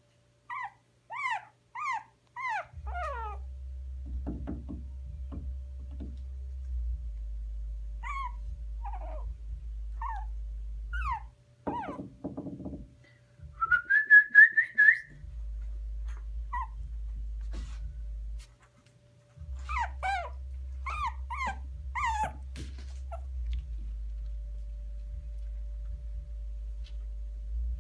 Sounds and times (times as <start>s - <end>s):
Whistling: 13.6s - 15.3s.